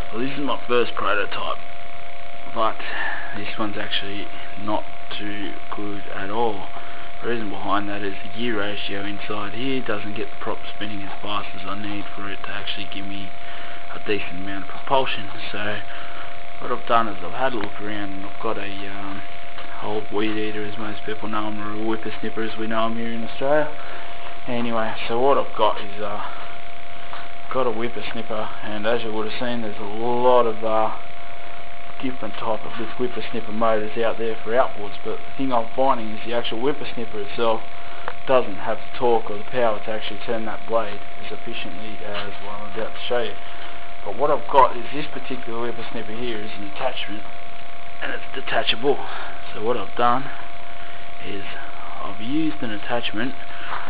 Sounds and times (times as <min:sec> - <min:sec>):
Speech: 0:00.0 - 0:01.7, 0:02.5 - 0:26.5, 0:27.1 - 0:31.1, 0:32.0 - 0:47.4, 0:48.0 - 0:50.5, 0:51.2 - 0:53.8.